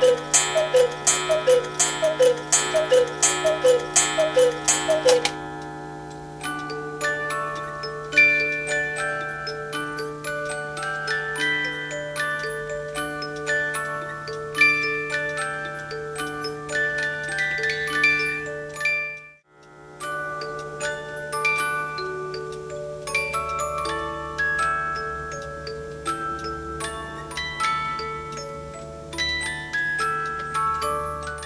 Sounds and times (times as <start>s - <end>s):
Clock: 0.0s - 31.4s
Music: 0.0s - 31.4s.